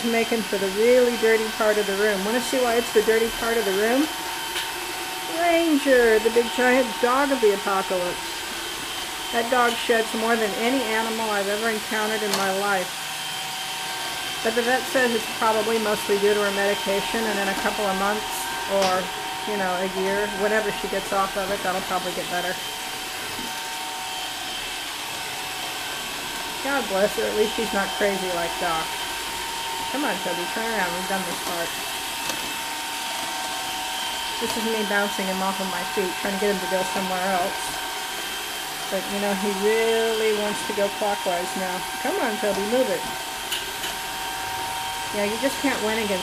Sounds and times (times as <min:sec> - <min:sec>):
Speech: 0:00.0 - 0:04.1, 0:05.3 - 0:08.2, 0:09.4 - 0:12.9, 0:14.5 - 0:22.6, 0:26.6 - 0:28.9, 0:29.9 - 0:31.7, 0:34.4 - 0:37.8, 0:38.9 - 0:43.2, 0:45.1 - 0:46.2
Vacuum cleaner: 0:00.0 - 0:46.2.